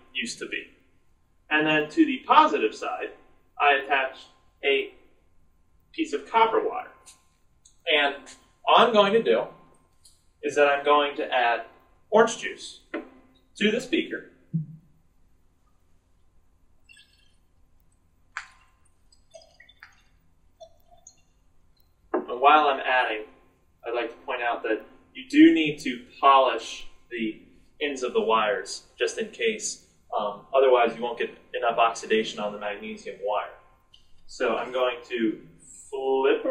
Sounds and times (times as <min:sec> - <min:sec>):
Speech: 0:00.0 - 0:00.6, 0:01.5 - 0:04.9, 0:06.0 - 0:07.0, 0:07.8 - 0:09.5, 0:10.4 - 0:12.8, 0:13.6 - 0:14.2, 0:22.2 - 0:33.6, 0:34.3 - 0:36.5.